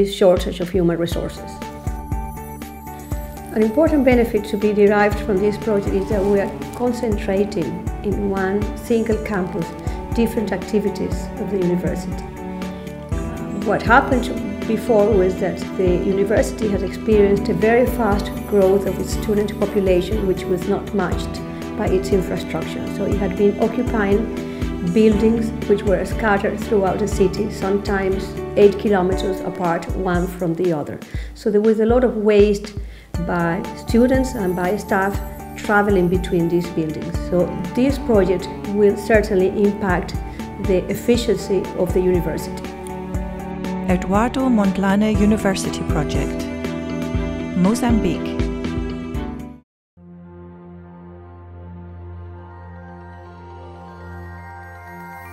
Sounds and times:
New-age music: 0.8s - 31.3s, 32.1s - 55.3s.

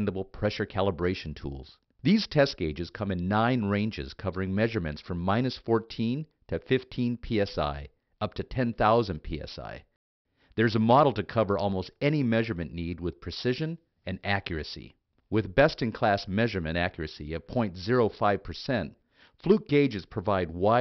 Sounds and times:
Speech: 0.0s - 10.0s, 10.6s - 20.8s.

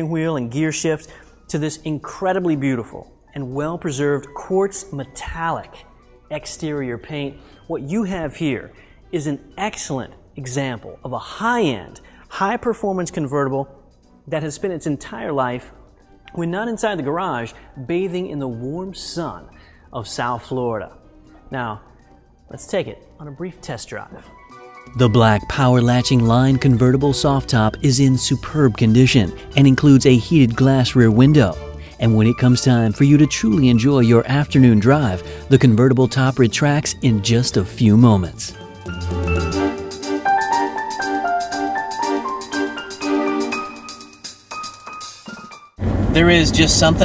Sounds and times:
Speech: 0.0s - 13.7s, 14.3s - 21.8s, 22.5s - 24.3s, 25.0s - 38.6s, 46.2s - 47.0s
Vibraphone: 36.3s - 45.6s.

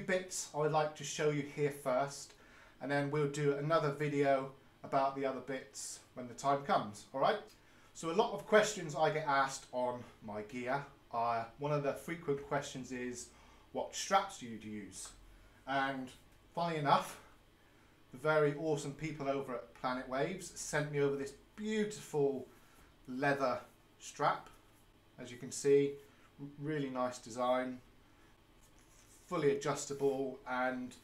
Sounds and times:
Speech: 0.0s - 17.3s, 18.1s - 22.5s, 23.1s - 24.6s, 25.2s - 27.9s, 29.2s - 31.0s.

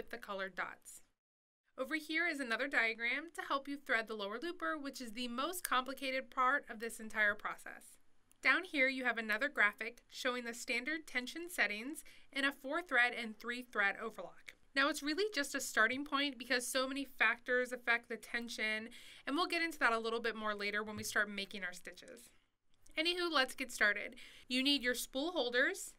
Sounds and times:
Speech: 0.0s - 1.1s, 1.8s - 22.3s, 23.0s - 25.9s.

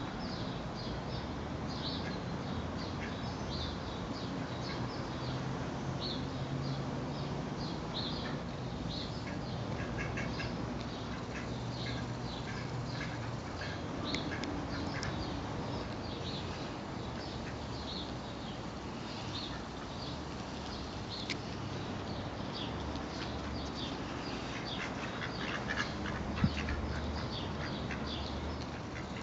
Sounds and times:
Duck: 9.2s - 10.5s, 24.5s - 27.0s.

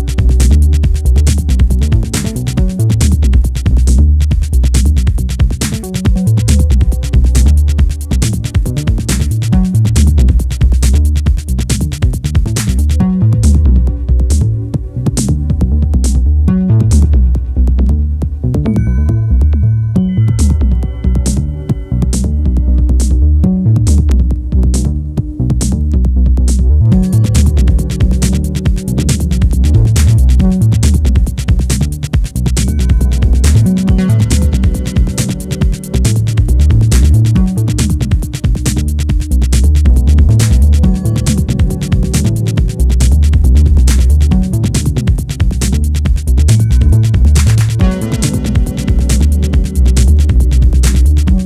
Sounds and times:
Techno: 0.0s - 18.8s, 20.0s - 51.4s.

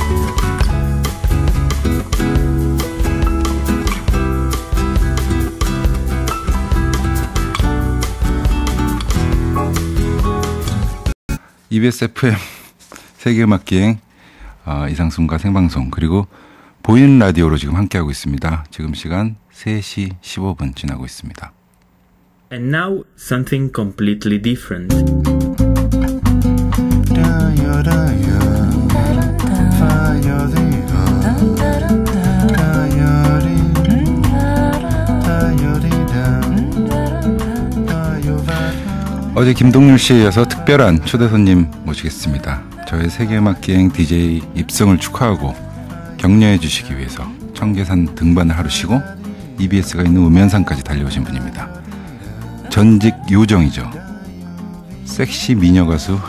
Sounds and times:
Music: 0.0s - 11.2s, 24.6s - 56.2s.

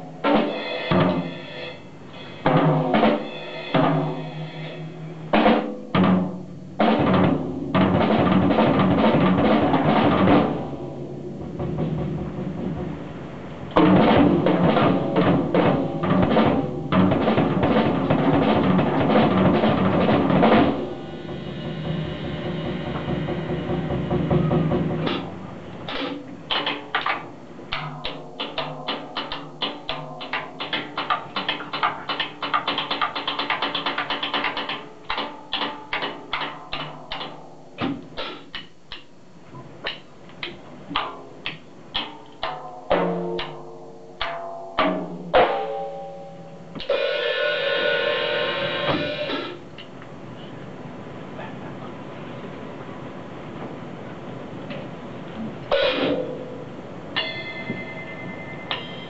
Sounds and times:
Drum kit: 0.0s - 50.0s, 54.6s - 59.1s.

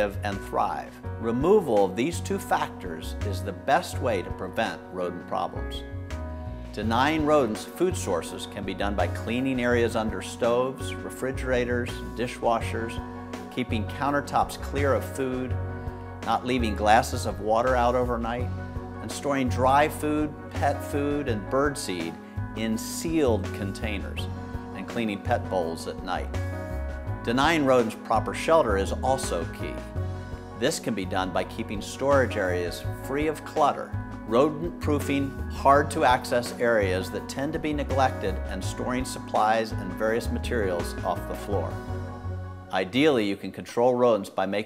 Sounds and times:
Speech: 0.0s - 5.8s, 6.8s - 15.5s, 16.2s - 26.4s, 27.3s - 29.9s, 30.6s - 41.8s, 42.7s - 44.6s
Music: 0.0s - 44.6s.

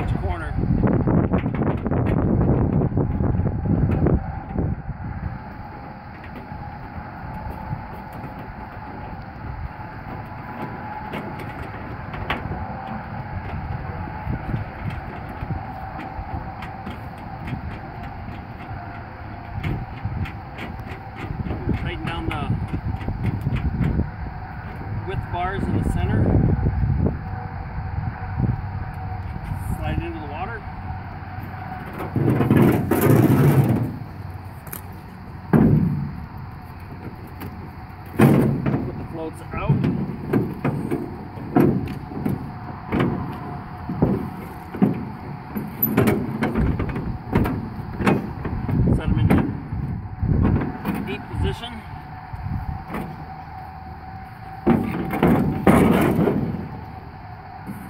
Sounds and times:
Speech: 0.0s - 0.6s, 21.8s - 22.6s, 25.1s - 26.3s, 29.6s - 30.7s, 39.1s - 39.8s, 48.9s - 49.4s, 51.0s - 51.9s.

